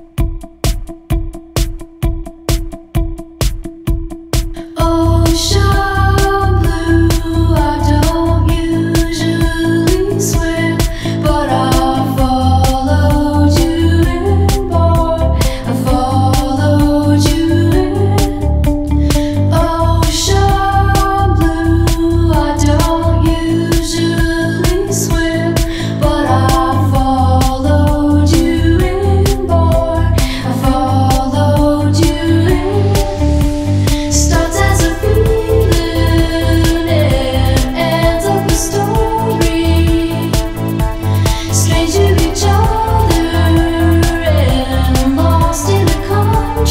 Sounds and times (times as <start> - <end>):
Independent music: 0.0 - 46.7.